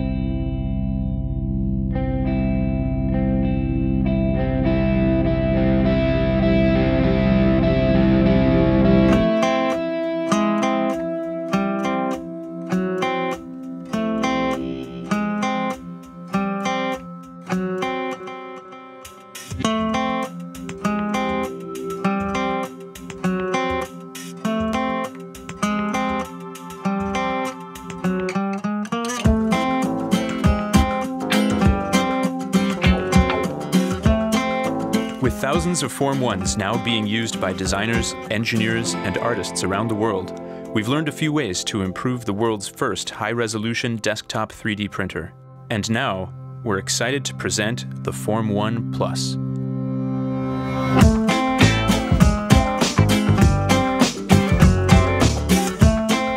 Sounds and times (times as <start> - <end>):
Music: 0.0 - 56.3.